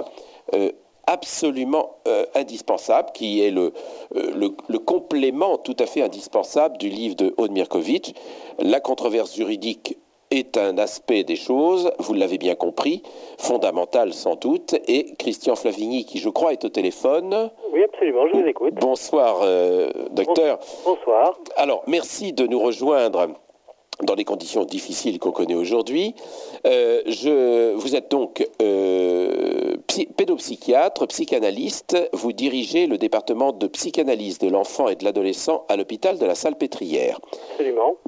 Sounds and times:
Speech: 0.0s - 23.4s, 24.0s - 38.0s.

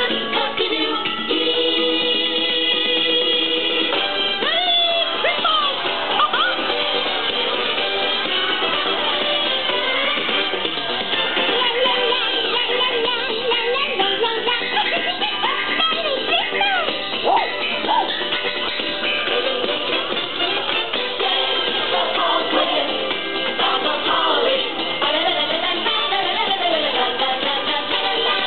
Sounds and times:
Music: 0.0s - 28.4s
Speech: 4.4s - 6.6s, 15.8s - 18.1s.

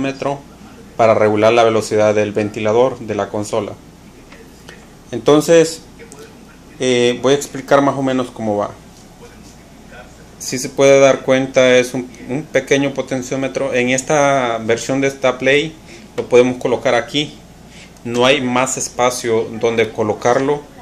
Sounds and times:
Speech: 0.0s - 17.4s, 18.0s - 20.8s.

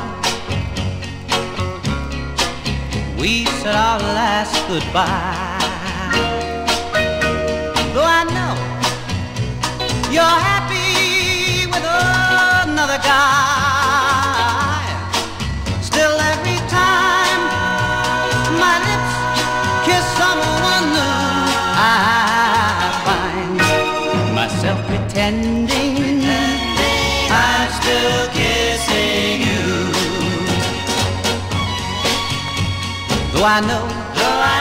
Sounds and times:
Music: 0.0s - 34.6s.

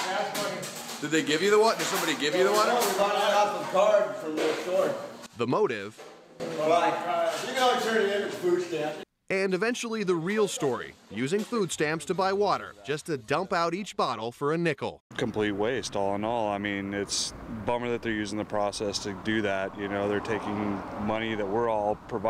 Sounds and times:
Speech: 0.0s - 22.3s.

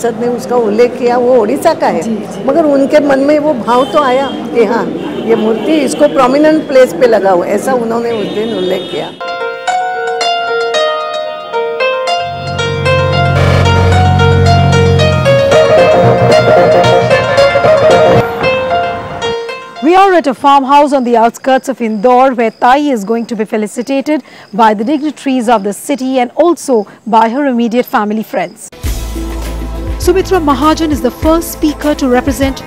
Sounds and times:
Speech: 0.0s - 9.2s, 30.0s - 32.6s
Music: 9.2s - 20.0s, 28.8s - 32.6s.

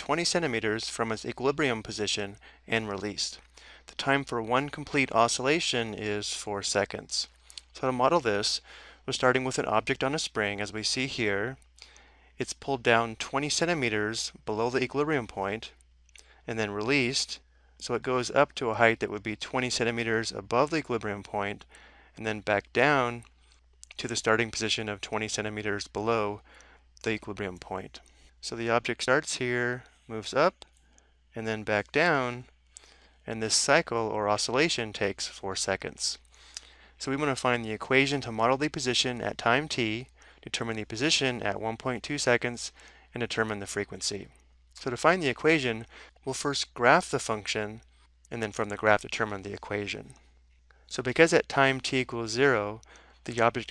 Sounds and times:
Speech: 0.0s - 11.6s, 12.4s - 15.8s, 16.5s - 23.3s, 23.9s - 26.4s, 27.0s - 30.6s, 31.4s - 32.5s, 33.3s - 36.2s, 37.0s - 50.2s, 50.9s - 53.7s.

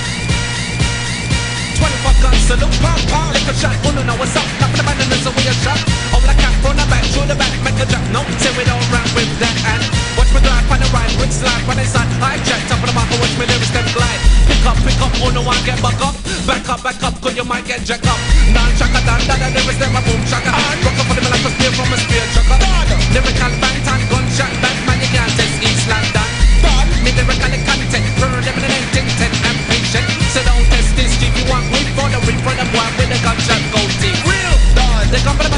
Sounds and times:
Music: 0.0s - 35.5s.

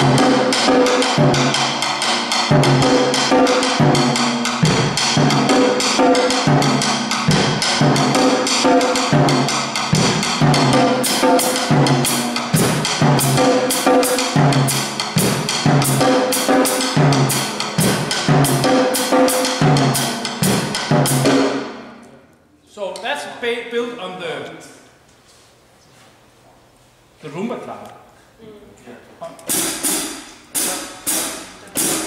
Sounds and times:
Bass drum: 0.0s - 21.8s
Drum kit: 0.0s - 22.0s, 29.3s - 32.0s.

